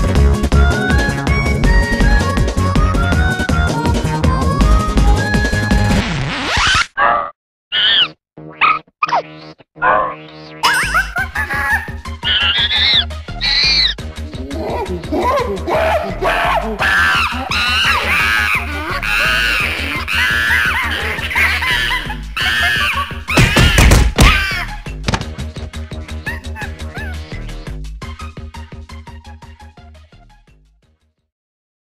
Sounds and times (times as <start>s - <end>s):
Music: 0.0s - 6.2s, 10.2s - 31.3s.